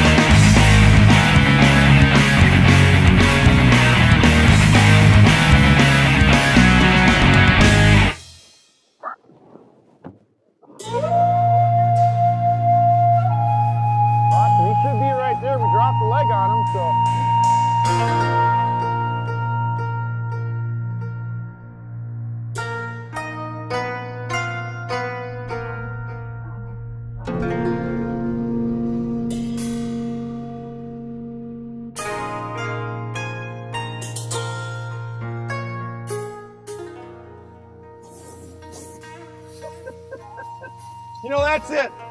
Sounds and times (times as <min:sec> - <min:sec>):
Music: 0:00.0 - 0:08.9, 0:10.8 - 0:42.1.